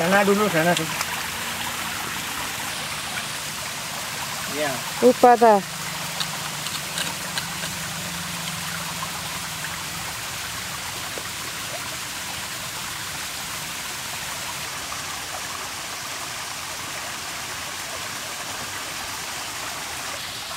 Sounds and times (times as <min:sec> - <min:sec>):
Outside, rural or natural: 0:00.0 - 0:20.5.